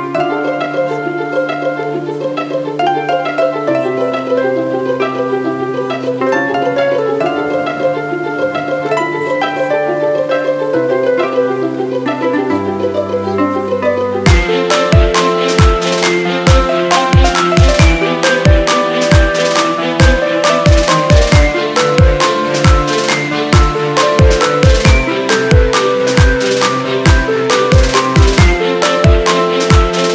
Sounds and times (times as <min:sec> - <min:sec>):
Pizzicato: 0:00.0 - 0:30.1.